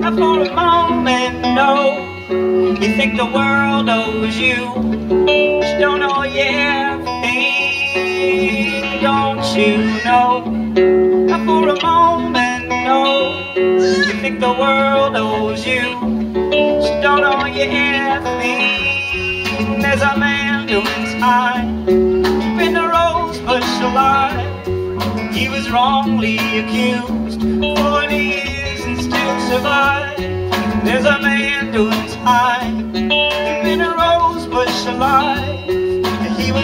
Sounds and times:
Music: 0.0s - 36.6s.

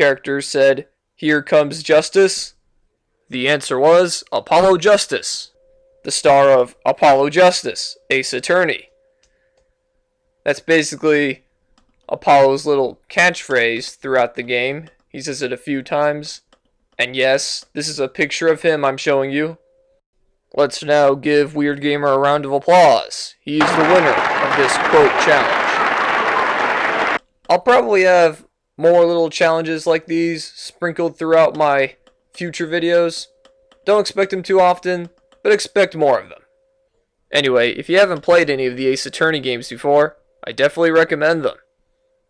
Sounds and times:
Speech: 0.0s - 2.5s, 3.3s - 5.5s, 6.1s - 8.8s, 10.5s - 11.4s, 12.1s - 16.4s, 17.0s - 19.6s, 20.6s - 25.8s, 27.5s - 33.3s, 33.9s - 36.4s, 37.3s - 41.6s.

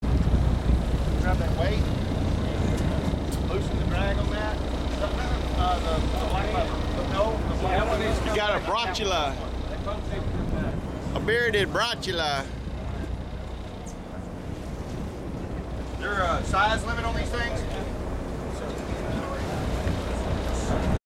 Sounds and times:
Speech: 3.5s - 13.1s, 16.0s - 17.9s.

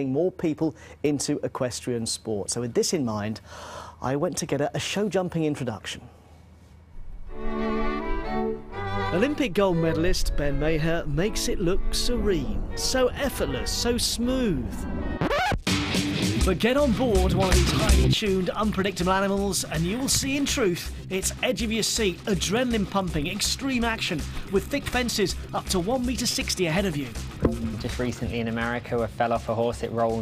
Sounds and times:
Speech: 0.0s - 3.4s, 4.0s - 6.1s, 9.1s - 14.8s, 16.4s - 30.2s
Music: 7.2s - 30.2s.

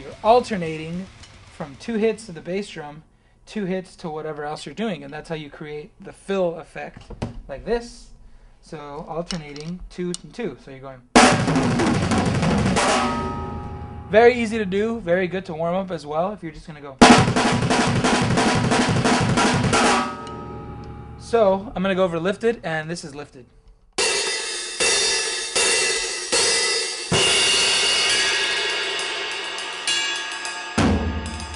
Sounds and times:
Drum kit: 0.0s - 2.8s, 11.2s - 15.7s, 17.0s - 22.6s, 24.0s - 31.5s
Speech: 0.0s - 11.1s, 14.1s - 17.0s, 21.2s - 23.5s
Bass drum: 11.2s - 15.3s, 17.0s - 21.9s, 30.8s - 31.5s.

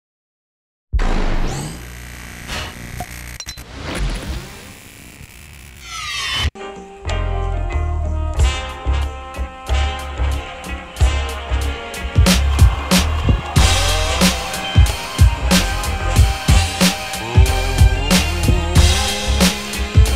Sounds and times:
Music: 6.5s - 20.1s.

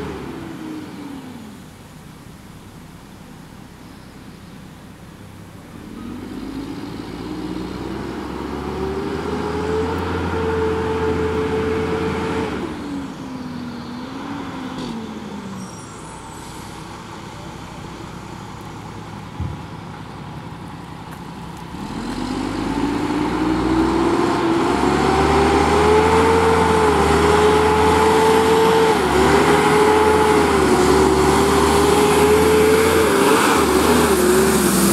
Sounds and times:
Truck: 0.0s - 34.9s.

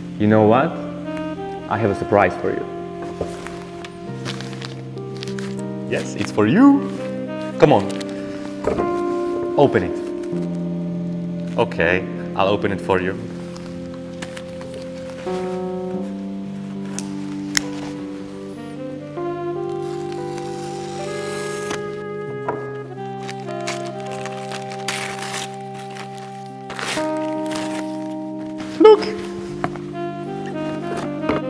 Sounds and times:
Music: 0.0s - 31.5s
Speech: 11.6s - 13.2s, 28.8s - 29.2s.

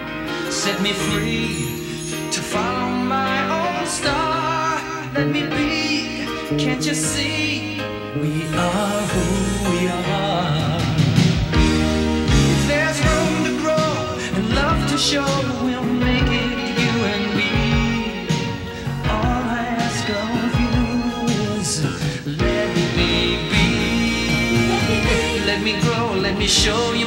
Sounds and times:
Independent music: 0.0s - 27.0s.

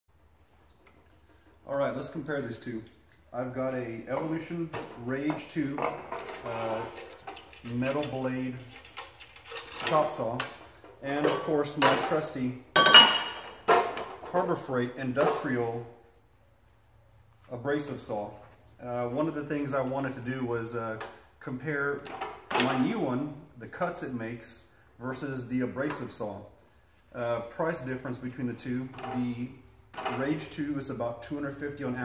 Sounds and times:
Speech: 1.6s - 7.0s, 7.6s - 8.7s, 9.8s - 12.7s, 14.2s - 16.0s, 17.5s - 32.0s.

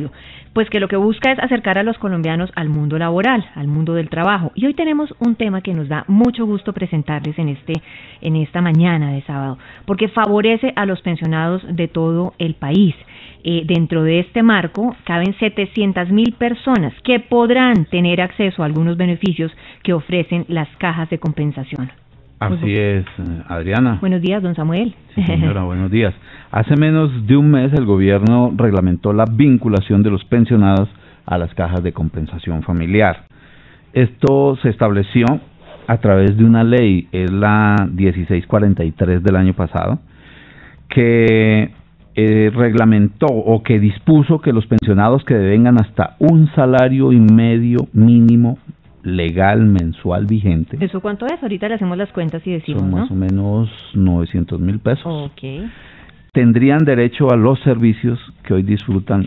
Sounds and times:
Speech: 0.0s - 33.2s, 34.0s - 40.0s, 40.9s - 55.7s, 56.4s - 59.2s.

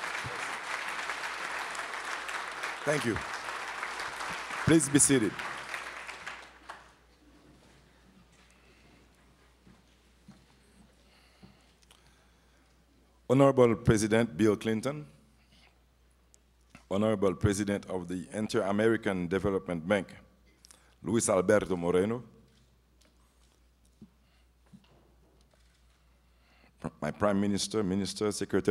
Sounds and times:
Male speech, man speaking: 2.8s - 3.2s, 4.7s - 5.4s, 13.3s - 15.1s, 16.9s - 20.2s, 21.0s - 22.3s, 26.8s - 28.7s.

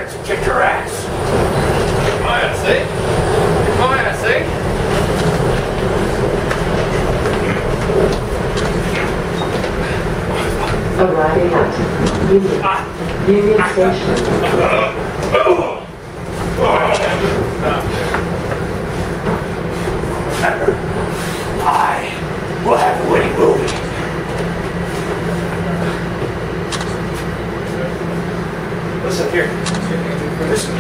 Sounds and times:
Speech: 0.0s - 1.2s, 3.7s - 4.5s, 10.4s - 15.9s, 21.6s - 23.9s, 29.0s - 30.8s
Subway, metro, underground: 0.0s - 30.8s
Train: 0.0s - 30.8s.

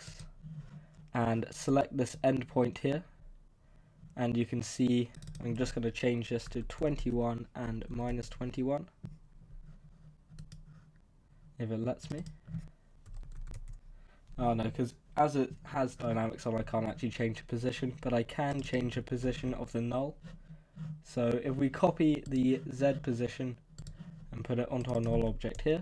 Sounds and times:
Speech: 1.2s - 3.1s, 4.2s - 8.9s, 11.6s - 12.3s, 14.4s - 20.2s, 21.1s - 23.6s, 24.3s - 25.8s.

